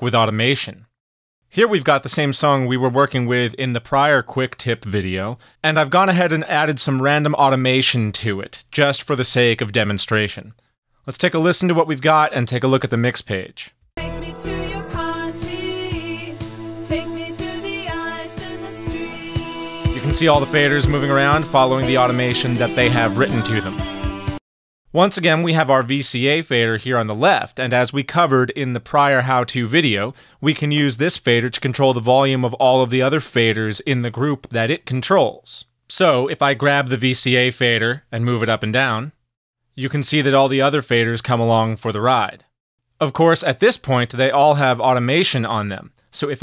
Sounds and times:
Speech: 0.0s - 0.9s, 1.5s - 13.8s, 19.9s - 24.0s, 25.0s - 39.2s, 39.8s - 46.4s
Music: 14.0s - 24.4s.

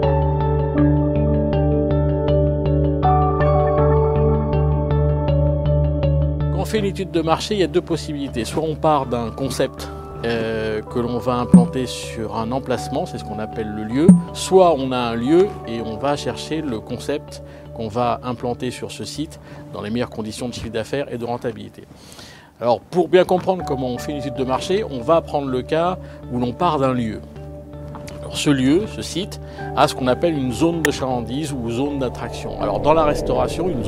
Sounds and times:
Music: 0.0s - 22.5s, 23.1s - 33.8s
Speech: 6.6s - 21.9s, 22.6s - 27.3s, 28.1s - 33.8s.

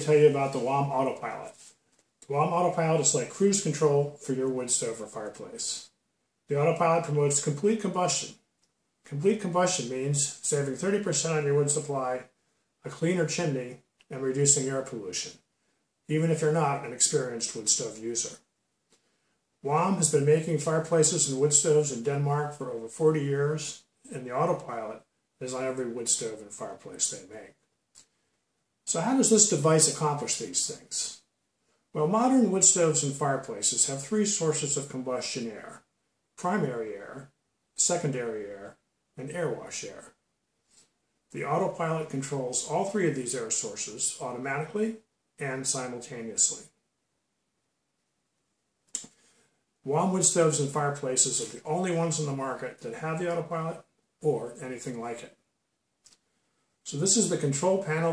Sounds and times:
Speech: 0.0s - 8.4s, 9.1s - 15.5s, 16.1s - 18.5s, 19.6s - 27.6s, 28.9s - 31.3s, 31.9s - 40.2s, 41.3s - 46.8s, 49.8s - 55.4s, 56.8s - 58.1s.

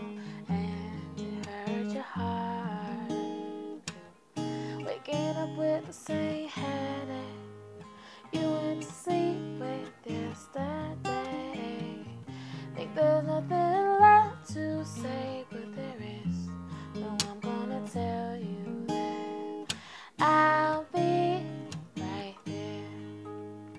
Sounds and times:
Music: 0.0s - 23.7s.

